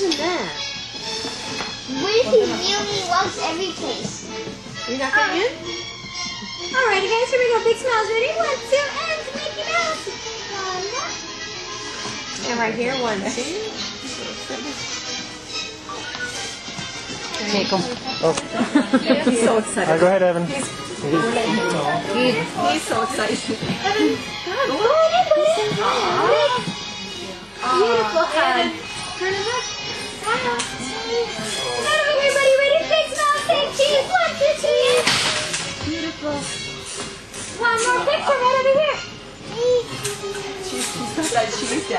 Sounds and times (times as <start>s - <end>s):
Music: 0.0s - 41.9s.